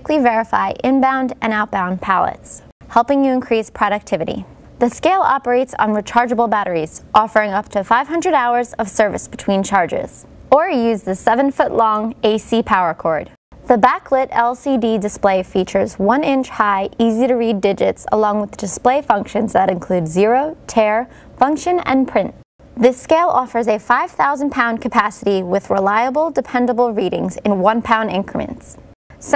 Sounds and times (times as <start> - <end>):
Speech: 0.0 - 29.3.